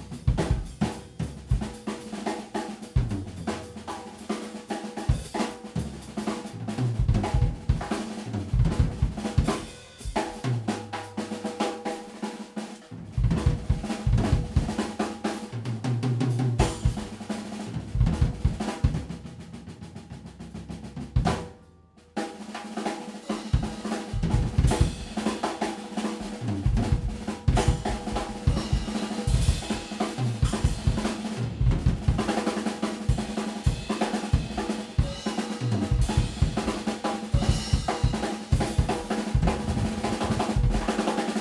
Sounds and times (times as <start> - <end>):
Cymbal: 0.0 - 15.6, 16.6 - 17.8, 22.2 - 41.4
Drum roll: 0.0 - 21.6, 22.2 - 41.4.